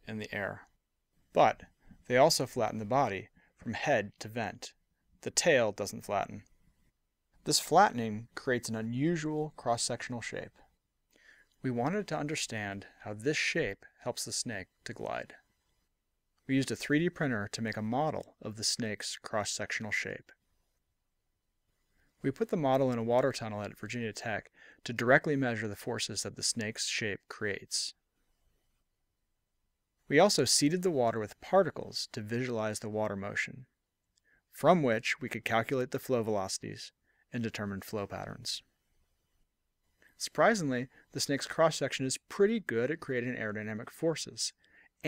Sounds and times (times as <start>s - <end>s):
Speech: 0.0s - 0.7s, 1.4s - 6.5s, 7.4s - 10.6s, 11.6s - 15.4s, 16.5s - 20.4s, 22.2s - 28.0s, 30.1s - 33.8s, 34.5s - 38.7s, 40.2s - 45.0s.